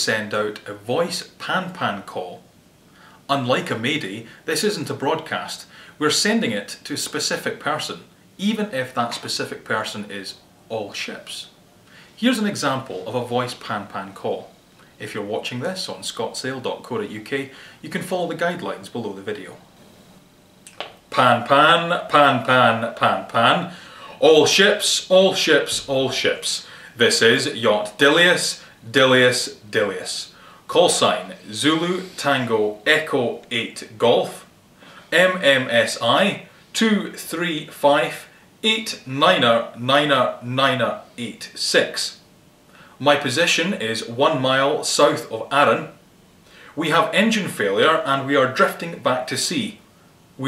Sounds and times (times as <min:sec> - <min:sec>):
Speech: 0:00.0 - 0:02.5, 0:03.3 - 0:11.6, 0:12.2 - 0:19.6, 0:20.7 - 0:34.5, 0:35.1 - 0:42.3, 0:43.0 - 0:46.0, 0:46.7 - 0:49.8.